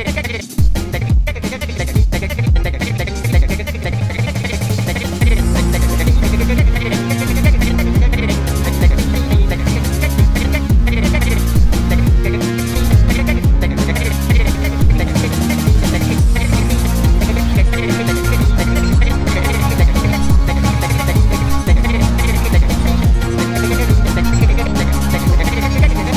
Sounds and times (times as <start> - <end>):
Musical instrument: 5.0 - 26.1.